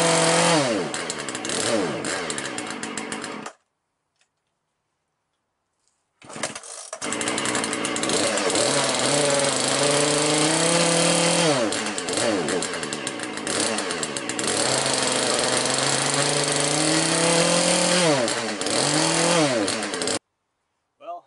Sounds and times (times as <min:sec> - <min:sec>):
Power tool: 0:00.0 - 0:03.6, 0:06.2 - 0:20.2.